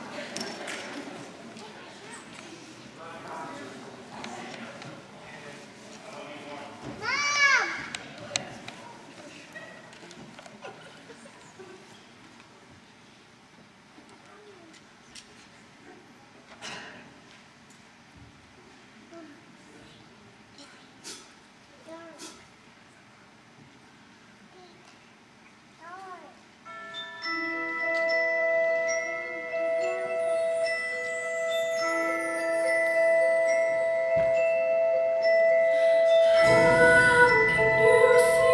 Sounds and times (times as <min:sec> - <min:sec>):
Marimba, xylophone: 0:26.6 - 0:38.5
Glockenspiel: 0:26.7 - 0:38.5.